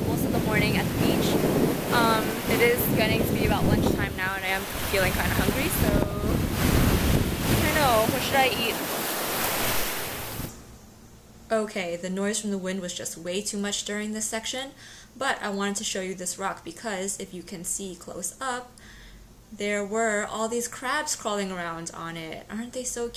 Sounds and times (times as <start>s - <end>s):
Speech: 0.0s - 6.4s, 7.6s - 8.8s, 11.5s - 18.7s, 19.6s - 23.1s
Outside, rural or natural: 0.0s - 11.4s.